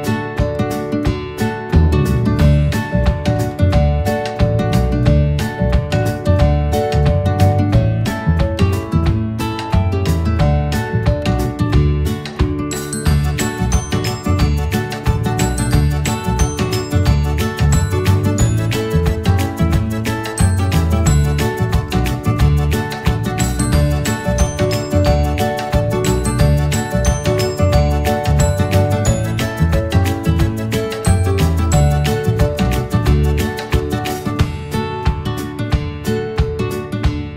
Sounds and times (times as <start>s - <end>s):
Music: 0.0s - 37.3s.